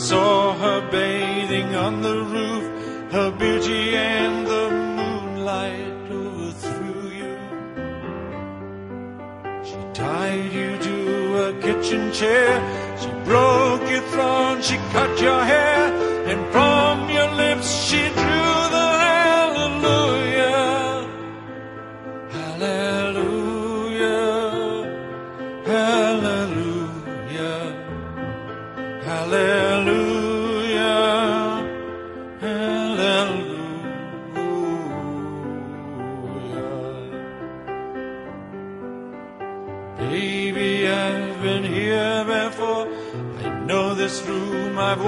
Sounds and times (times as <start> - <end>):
Music: 0.0 - 45.0.